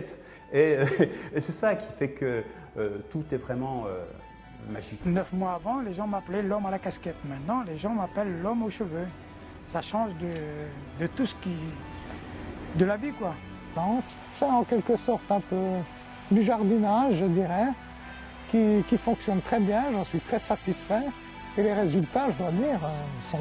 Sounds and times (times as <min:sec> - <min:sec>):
Speech: 0:00.0 - 0:09.1, 0:12.8 - 0:17.8, 0:18.5 - 0:23.4
Music: 0:00.0 - 0:23.4.